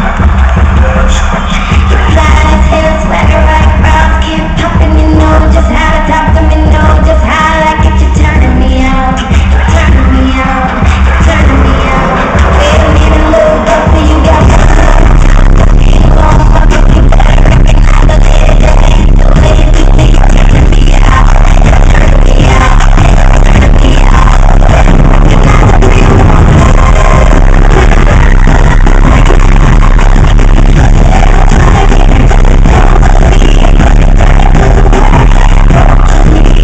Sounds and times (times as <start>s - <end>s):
Music: 0.0s - 36.6s.